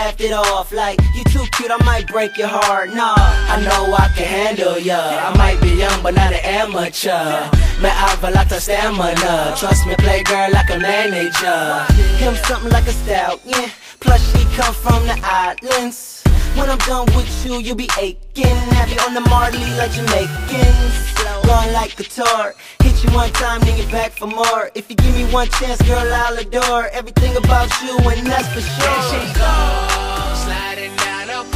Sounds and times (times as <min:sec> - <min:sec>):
Hip hop music: 0:00.0 - 0:31.5.